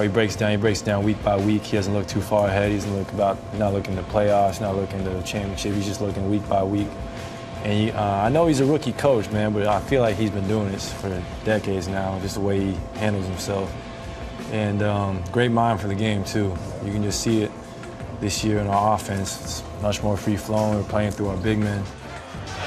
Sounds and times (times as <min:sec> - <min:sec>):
Speech: 0:00.0 - 0:07.0, 0:07.6 - 0:13.7, 0:14.5 - 0:17.5, 0:18.2 - 0:21.9
Music: 0:00.0 - 0:22.6.